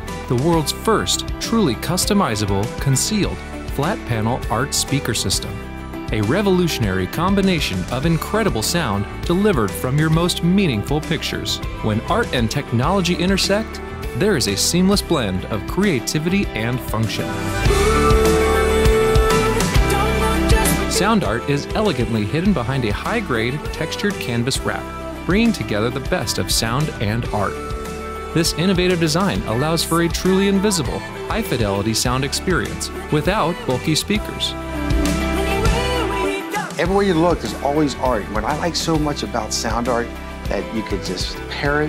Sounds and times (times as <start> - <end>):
Music: 0.0 - 41.8
Speech: 0.3 - 17.4, 20.9 - 27.6, 28.4 - 34.6, 36.7 - 41.8.